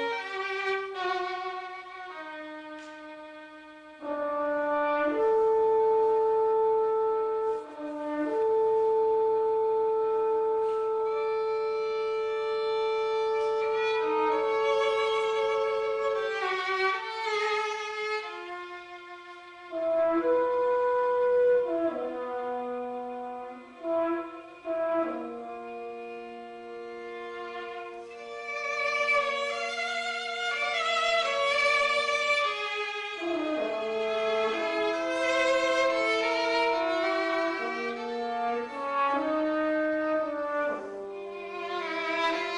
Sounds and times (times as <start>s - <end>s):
French horn: 0.0s - 42.5s.